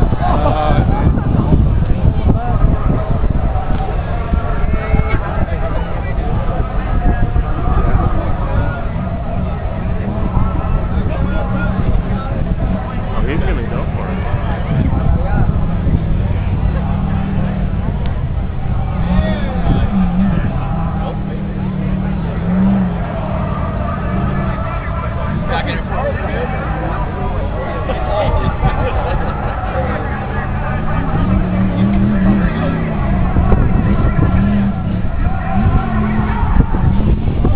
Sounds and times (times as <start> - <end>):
Speech: 0.0 - 17.7, 19.0 - 36.6
Vehicle: 0.0 - 37.5.